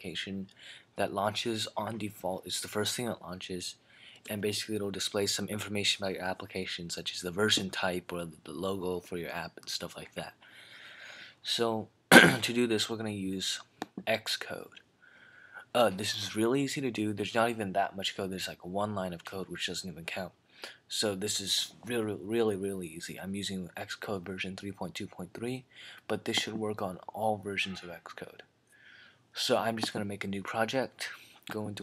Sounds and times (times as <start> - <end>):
Speech: 0.0 - 10.4, 11.4 - 14.8, 15.7 - 28.5, 29.4 - 31.8.